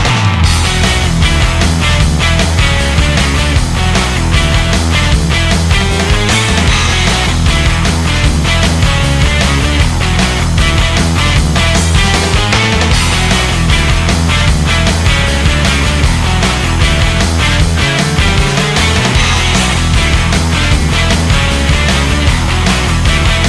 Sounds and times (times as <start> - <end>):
Music: 0.0 - 23.4.